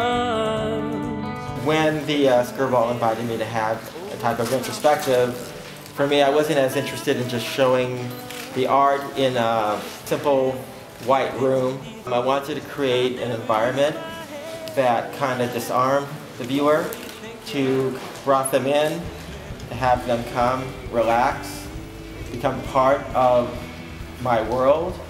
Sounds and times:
Music: 0.0 - 25.1
Speech: 1.6 - 19.1, 19.7 - 23.6, 24.2 - 25.1.

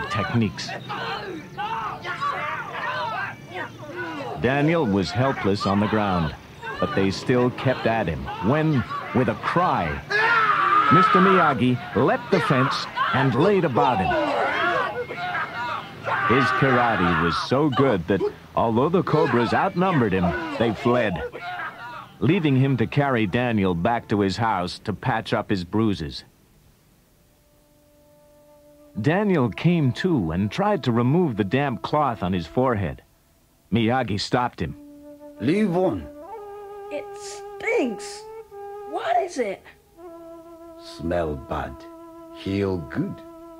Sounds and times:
Speech: 0.0 - 10.0, 15.5 - 26.3, 29.0 - 33.0, 33.7 - 34.8, 35.4 - 36.1, 42.4 - 43.2
Music: 27.2 - 33.1, 33.8 - 43.6.

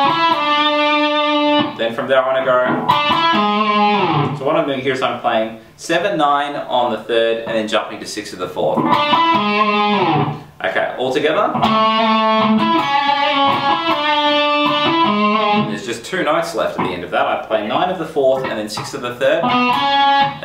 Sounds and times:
Guitar: 0.0 - 5.3, 7.4 - 20.4.

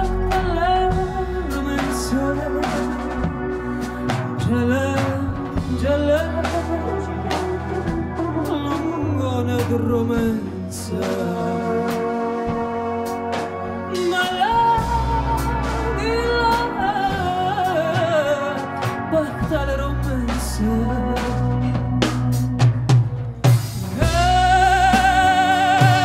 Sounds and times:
Music: 0.0 - 26.0.

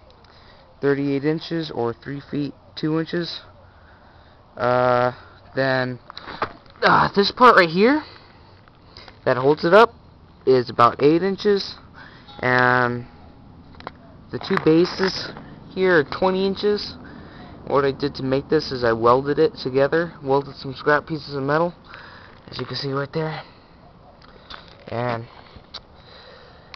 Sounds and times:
Speech: 0.8 - 3.5, 4.6 - 6.0, 6.8 - 8.1, 9.3 - 9.9, 14.3 - 17.0, 17.7 - 21.8, 22.5 - 23.5, 24.9 - 25.3.

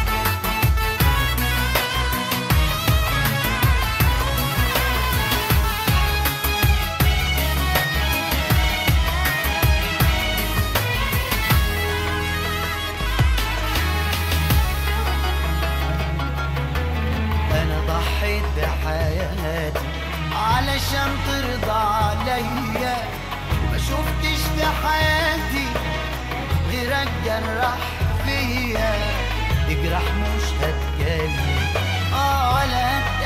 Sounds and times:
Middle Eastern music: 0.0 - 33.2.

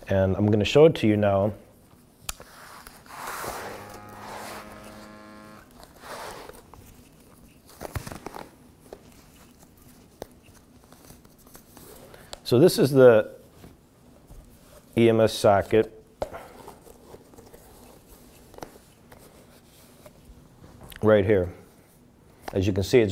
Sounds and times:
Speech: 0.0 - 1.6, 12.4 - 13.4, 15.0 - 16.0, 20.9 - 21.7, 22.5 - 23.1
Inside, small room: 0.0 - 23.1.

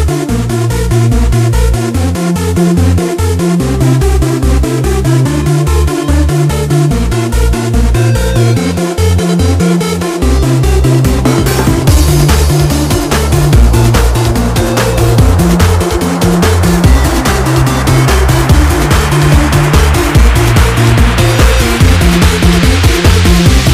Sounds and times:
Music: 0.0 - 23.7.

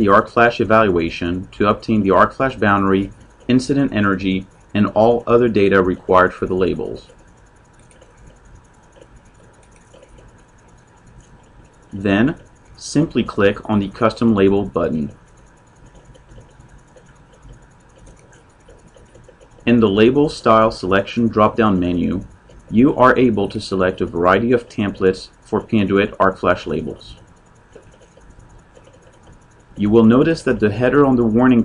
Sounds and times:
Speech: 0.0 - 7.1, 12.0 - 15.2, 19.7 - 27.2, 29.8 - 31.6.

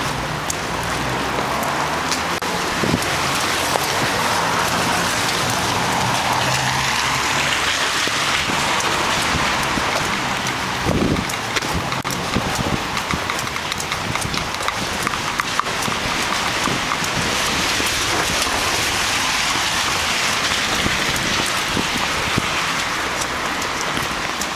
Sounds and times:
Rain on surface: 0.0 - 24.5
Raindrop: 0.0 - 24.5.

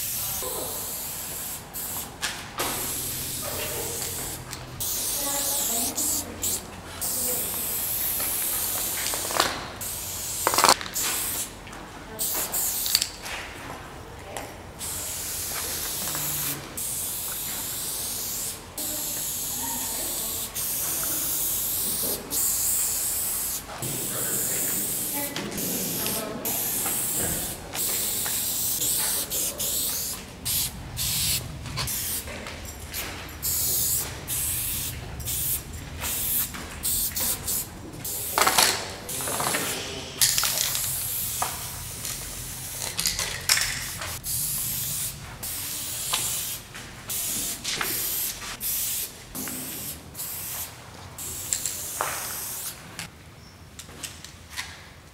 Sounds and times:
Spray: 0.0 - 11.5, 12.2 - 13.1, 14.8 - 32.3, 32.9 - 52.8
Speech: 3.4 - 4.2, 5.1 - 7.8, 18.8 - 21.4, 23.7 - 28.2, 28.8 - 30.0, 38.0 - 40.2.

